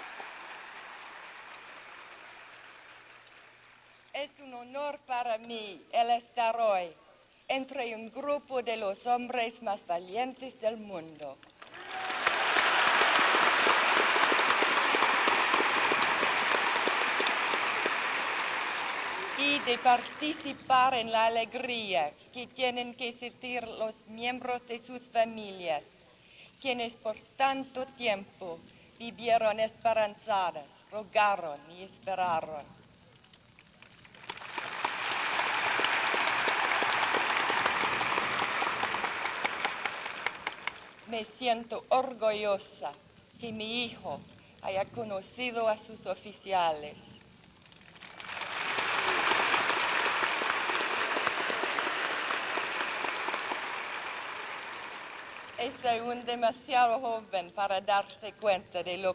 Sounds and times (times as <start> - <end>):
Narration, monologue: 3.9 - 11.6, 19.4 - 33.6, 40.8 - 47.3, 55.5 - 59.1
Female speech, woman speaking: 4.1 - 11.4, 19.4 - 25.9, 26.6 - 32.8, 41.1 - 47.1, 55.6 - 59.1.